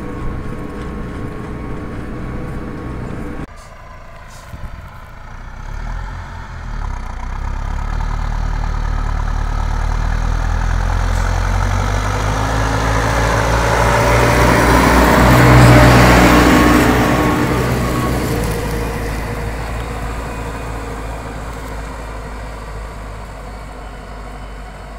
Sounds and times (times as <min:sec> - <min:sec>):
Truck: 0:00.0 - 0:24.9.